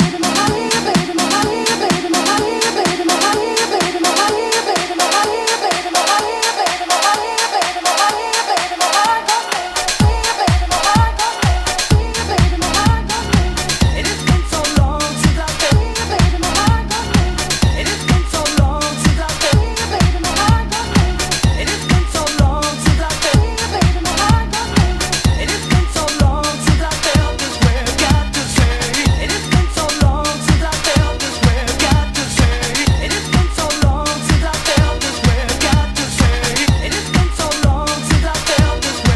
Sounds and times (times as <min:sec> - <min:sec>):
Dance music: 0:00.0 - 0:39.1
Disco: 0:00.0 - 0:39.1.